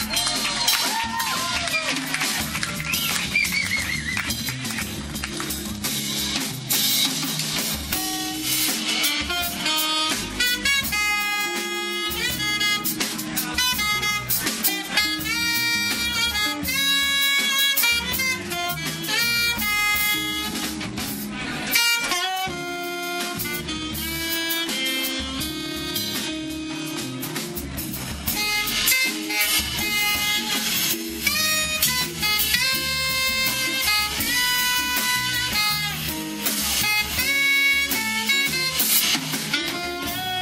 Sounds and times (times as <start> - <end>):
Brass instrument: 0.0 - 40.4
Saxophone: 0.0 - 40.4.